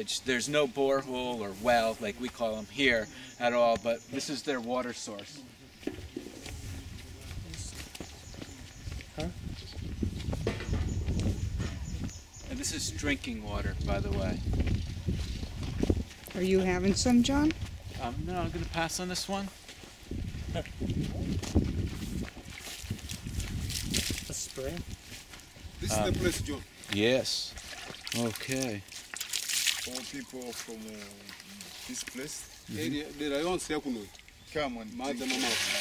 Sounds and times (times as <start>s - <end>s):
Speech: 25.8s - 27.5s, 32.2s - 35.8s.